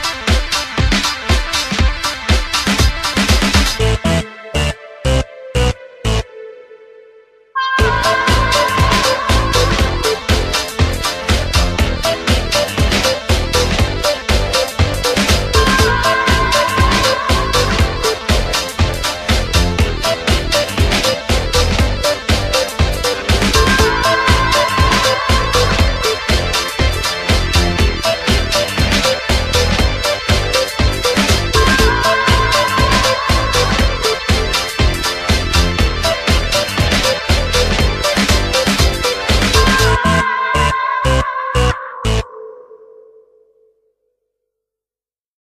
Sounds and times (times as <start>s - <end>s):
Electronic music: 0.0s - 43.4s.